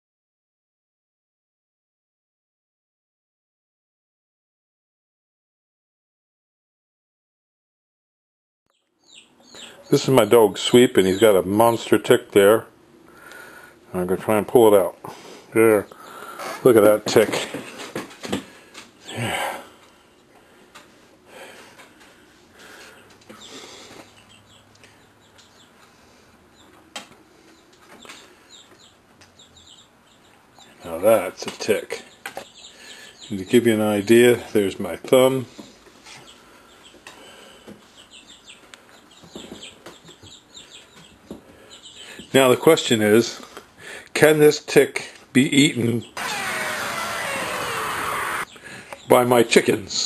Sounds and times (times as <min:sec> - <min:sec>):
Bird vocalization, bird call, bird song: 0:08.7 - 0:11.7, 0:22.9 - 0:25.8, 0:26.5 - 0:26.8, 0:27.4 - 0:30.9, 0:31.9 - 0:34.5, 0:35.6 - 0:42.6
Speech: 0:09.9 - 0:12.7, 0:13.9 - 0:15.0, 0:15.6 - 0:16.0, 0:16.6 - 0:17.6, 0:30.8 - 0:32.1, 0:33.3 - 0:35.5, 0:42.3 - 0:43.4, 0:44.2 - 0:46.1, 0:49.1 - 0:50.0.